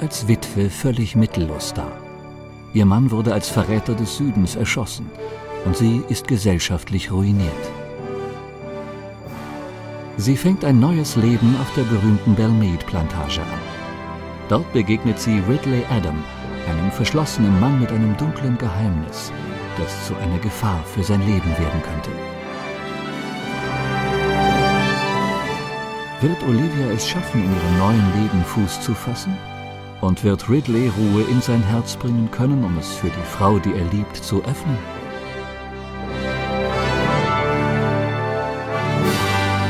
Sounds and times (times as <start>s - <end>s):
Speech: 0.0s - 2.0s, 2.8s - 7.8s, 10.2s - 13.6s, 14.5s - 22.2s, 26.2s - 29.4s, 30.0s - 34.9s
Music: 0.0s - 39.6s.